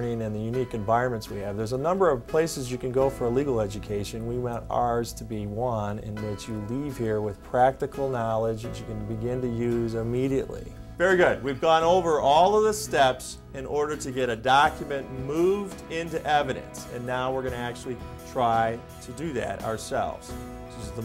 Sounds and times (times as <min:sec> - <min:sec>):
Music: 0:00.0 - 0:21.0
Speech: 0:00.0 - 0:21.0.